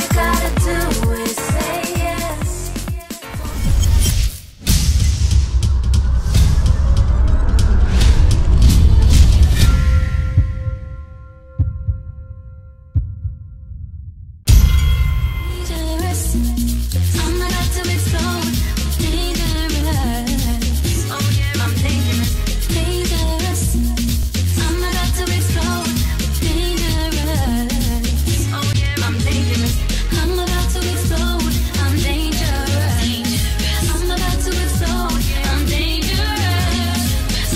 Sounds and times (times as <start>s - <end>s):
House music: 0.0s - 3.6s, 15.6s - 37.5s.